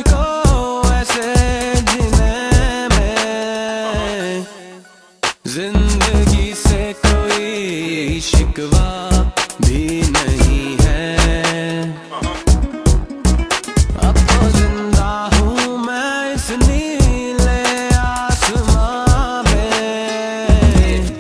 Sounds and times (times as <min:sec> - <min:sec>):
Afrobeat: 0:00.0 - 0:21.2.